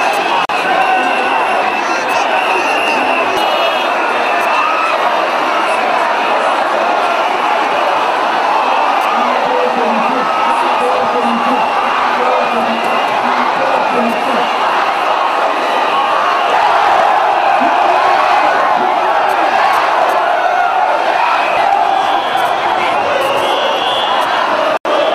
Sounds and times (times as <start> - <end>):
Speech: 0.0 - 7.0, 8.8 - 14.8, 17.5 - 20.1, 22.2 - 25.0
Crowd: 0.0 - 25.1.